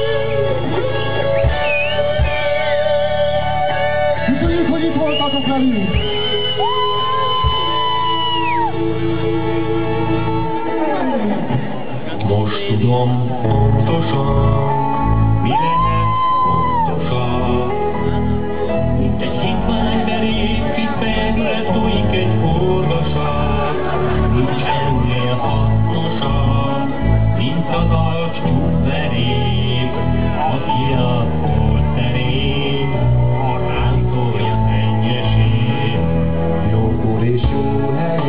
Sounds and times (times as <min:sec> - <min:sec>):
Music: 0:00.0 - 0:38.2.